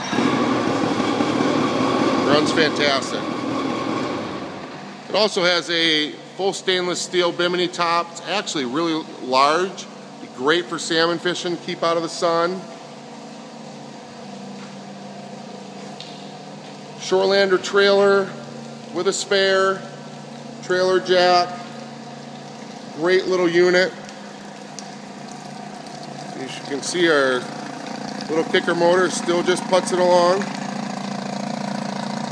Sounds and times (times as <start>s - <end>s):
Speech: 2.3s - 3.3s, 5.1s - 12.7s, 17.0s - 19.9s, 20.6s - 21.7s, 23.0s - 24.0s, 26.4s - 27.5s, 28.3s - 30.5s.